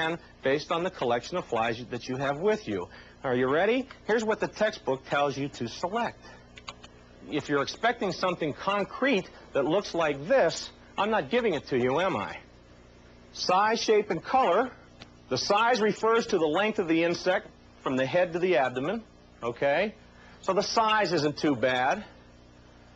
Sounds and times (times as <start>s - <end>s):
Speech: 0.0s - 6.2s, 7.3s - 12.5s, 13.4s - 22.2s.